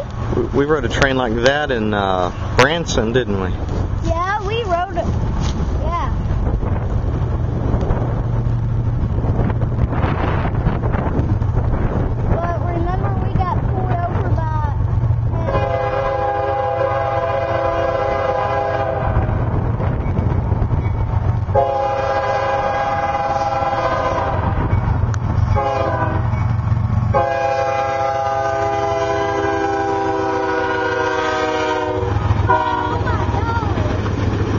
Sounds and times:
Railroad car, train wagon: 0:00.0 - 0:34.5
Train: 0:00.0 - 0:34.5
Wind noise (microphone): 0:03.6 - 0:15.6, 0:17.6 - 0:21.7.

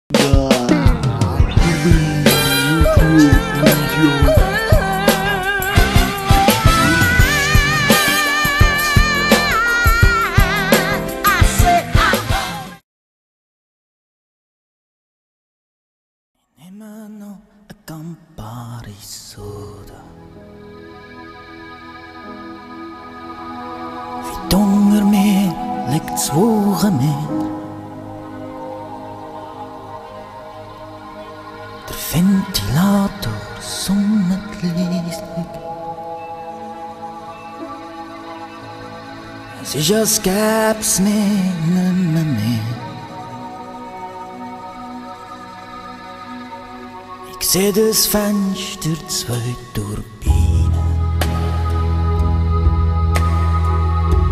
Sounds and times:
Music: 0:00.1 - 0:12.8, 0:18.8 - 0:54.3.

